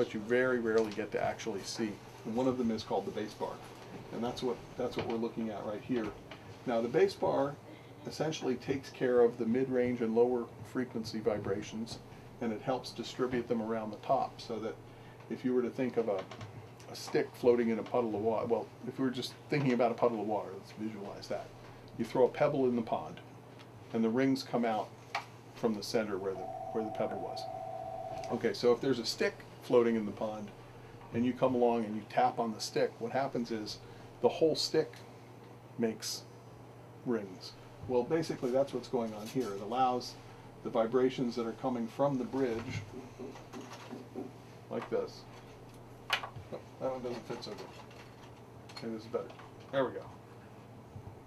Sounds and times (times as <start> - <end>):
Speech: 0.0 - 23.3, 23.9 - 24.9, 25.6 - 27.5, 28.3 - 35.0, 35.8 - 36.3, 37.0 - 42.9, 44.7 - 45.3, 46.5 - 47.7, 48.7 - 50.2.